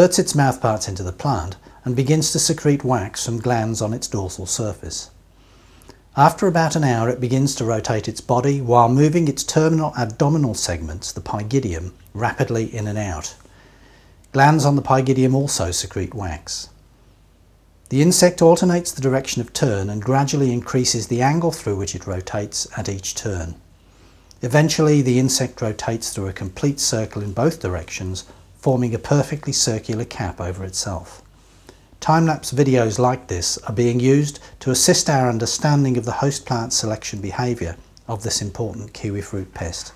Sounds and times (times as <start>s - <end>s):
Speech: 0.0s - 5.2s, 6.1s - 13.4s, 14.3s - 16.8s, 17.9s - 23.6s, 24.4s - 31.3s, 32.0s - 39.9s.